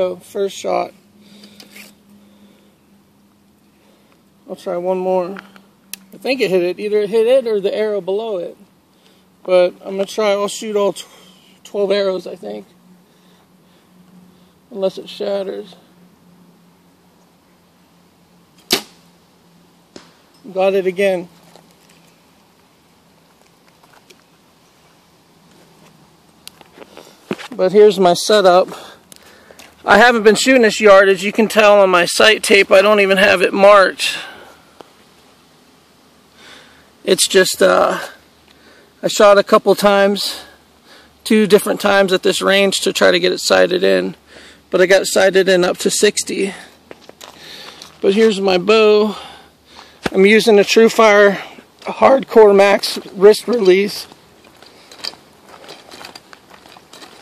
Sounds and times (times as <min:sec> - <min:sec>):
Speech: 0:00.0 - 0:01.0, 0:04.5 - 0:05.5, 0:06.2 - 0:08.6, 0:09.4 - 0:12.7, 0:14.7 - 0:15.9, 0:20.4 - 0:21.3, 0:27.6 - 0:29.0, 0:29.9 - 0:34.3, 0:37.0 - 0:38.2, 0:39.0 - 0:40.6, 0:41.2 - 0:46.7, 0:48.0 - 0:49.3, 0:50.1 - 0:54.1.